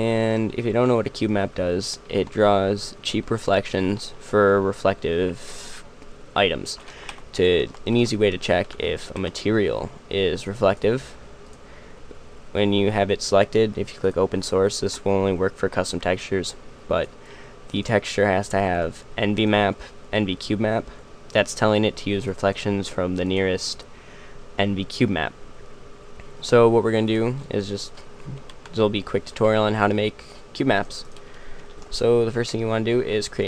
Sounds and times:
Speech: 0.0s - 5.8s, 6.4s - 11.2s, 12.5s - 17.1s, 17.7s - 23.9s, 24.6s - 25.4s, 26.4s - 31.1s, 31.9s - 33.4s.

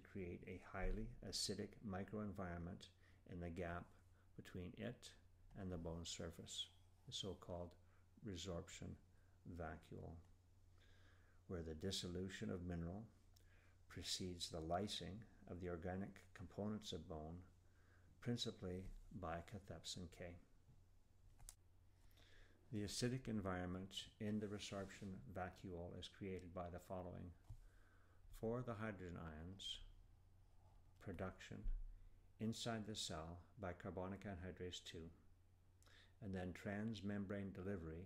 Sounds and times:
Speech: 0.0s - 10.3s, 11.5s - 13.2s, 13.9s - 17.5s, 18.2s - 20.5s, 22.7s - 27.4s, 28.3s - 30.0s, 31.0s - 31.8s, 32.4s - 35.3s, 36.2s - 38.0s.

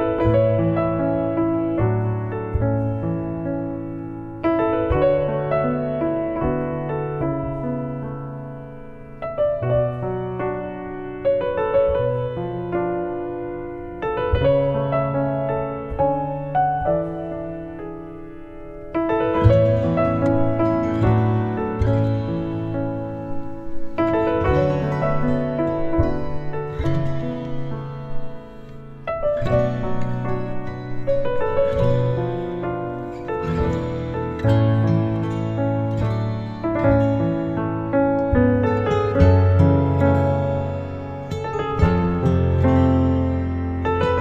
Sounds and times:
Music: 0.0s - 44.2s.

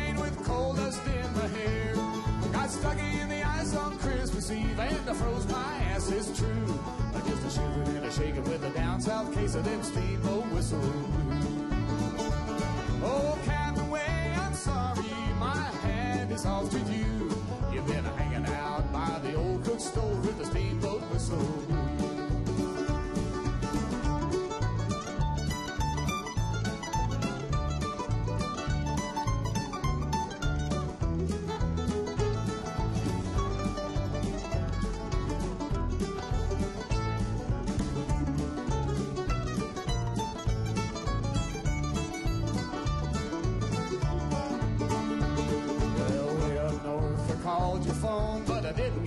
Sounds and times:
Music: 0.0s - 49.0s.

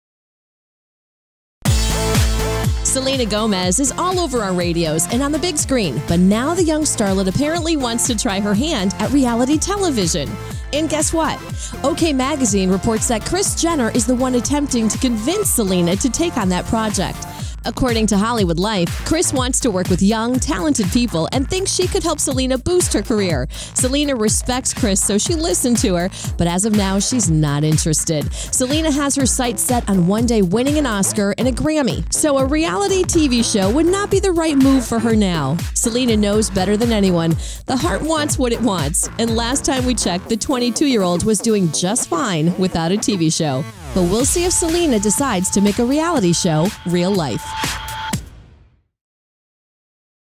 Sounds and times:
Music: 1.6s - 49.0s
Speech: 2.9s - 47.4s.

